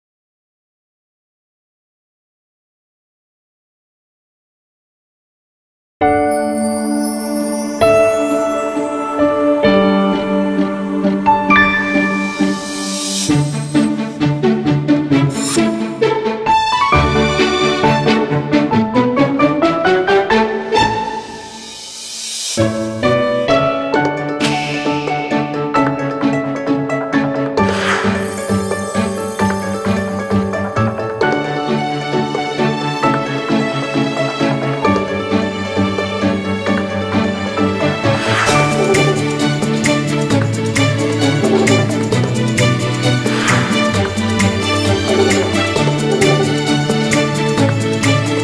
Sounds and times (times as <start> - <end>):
New-age music: 6.0 - 48.4.